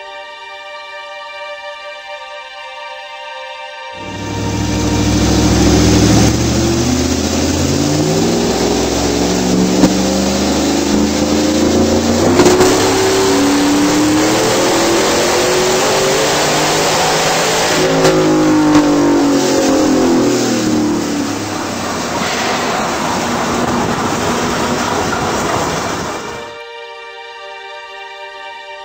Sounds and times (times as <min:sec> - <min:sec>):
Accelerating, revving, vroom: 0:04.0 - 0:26.5
Car: 0:04.0 - 0:26.6.